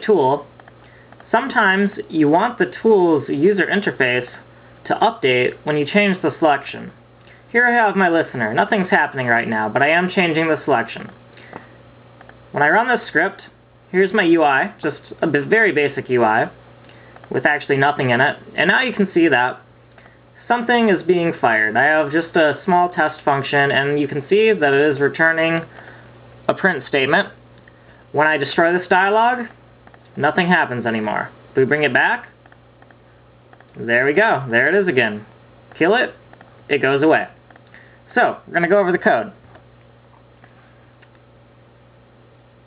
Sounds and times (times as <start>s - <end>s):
Speech: 0.0s - 0.5s, 1.3s - 11.2s, 12.5s - 16.6s, 17.3s - 19.7s, 20.4s - 25.8s, 26.5s - 27.4s, 28.1s - 32.4s, 33.8s - 37.4s, 38.1s - 39.4s.